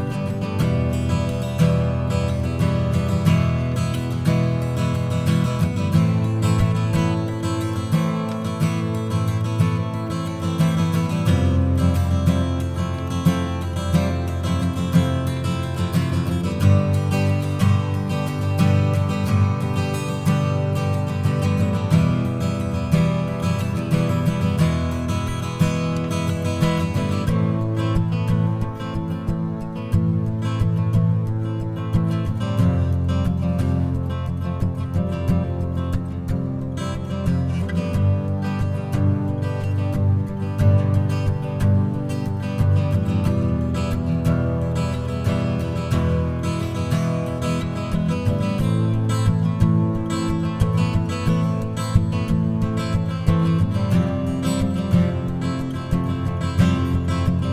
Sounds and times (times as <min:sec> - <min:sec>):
Acoustic guitar: 0:00.0 - 0:57.5.